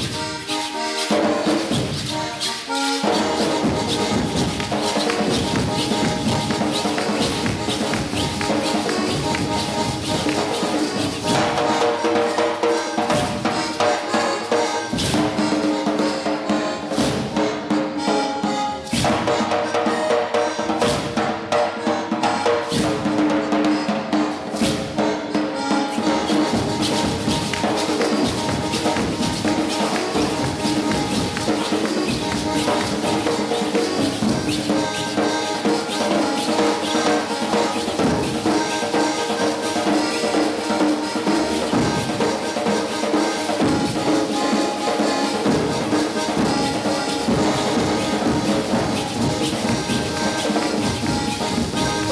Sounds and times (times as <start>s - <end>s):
Music: 0.0s - 52.1s.